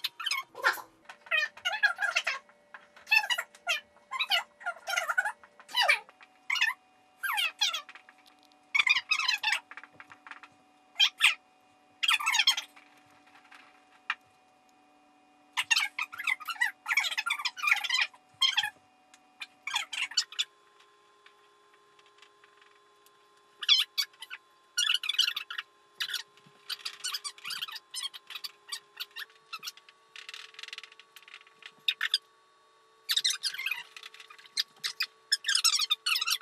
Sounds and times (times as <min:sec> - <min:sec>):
Inside, small room: 0:00.0 - 0:36.4.